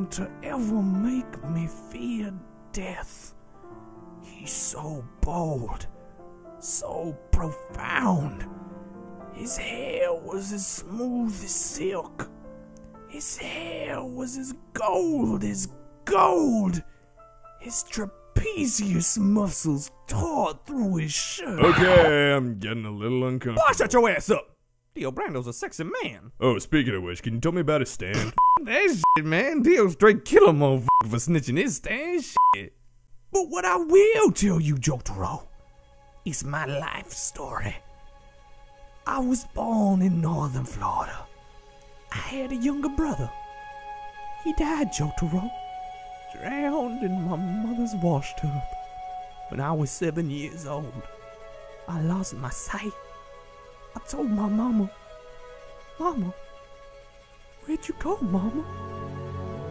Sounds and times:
Male speech, man speaking: 0.0s - 3.4s, 4.3s - 5.9s, 6.6s - 8.5s, 9.4s - 12.3s, 13.2s - 16.8s, 17.6s - 32.7s, 33.4s - 35.5s, 36.3s - 37.8s, 39.1s - 41.3s, 42.1s - 43.4s, 44.4s - 45.5s, 46.4s - 48.8s, 49.5s - 51.1s, 51.9s - 53.0s, 54.0s - 54.9s, 56.0s - 56.4s, 57.7s - 58.6s
Music: 0.0s - 24.4s, 25.0s - 32.6s, 33.4s - 59.7s.

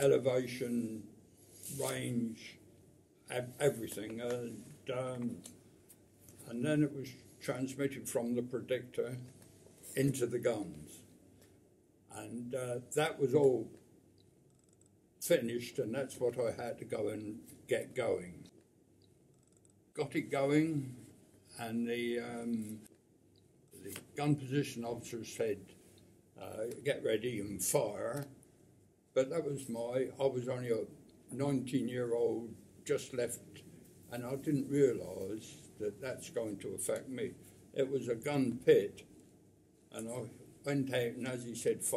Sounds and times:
Speech: 0.0s - 2.6s, 3.3s - 5.6s, 6.4s - 9.3s, 9.9s - 11.1s, 12.1s - 13.8s, 15.2s - 18.5s, 20.0s - 22.9s, 23.8s - 25.8s, 26.4s - 28.4s, 29.1s - 39.1s, 39.9s - 41.9s.

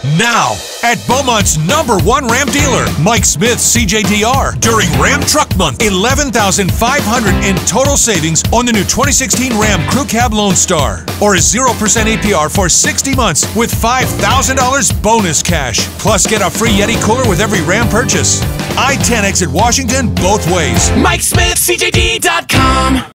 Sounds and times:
Music: 0.0s - 23.1s
Speech: 0.0s - 23.1s.

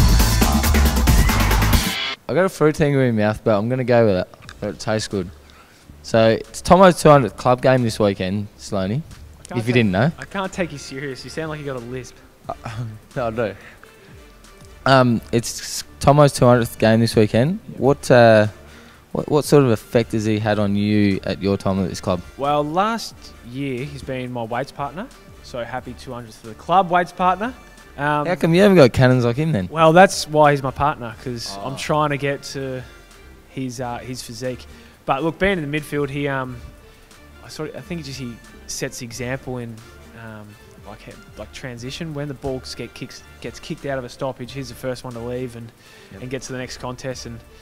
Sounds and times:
Music: 0.0s - 47.6s
Speech: 2.3s - 5.4s, 6.0s - 13.6s, 14.8s - 32.9s, 33.5s - 36.6s, 37.4s - 47.4s.

